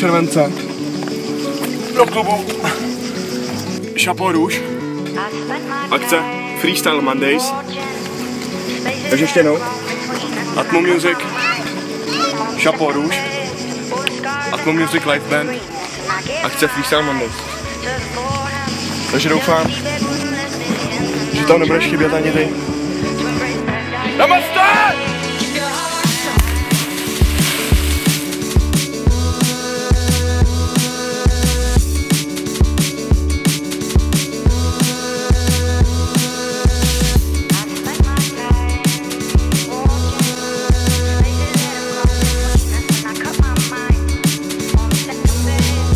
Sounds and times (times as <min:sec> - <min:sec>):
Music: 0:00.0 - 0:45.9.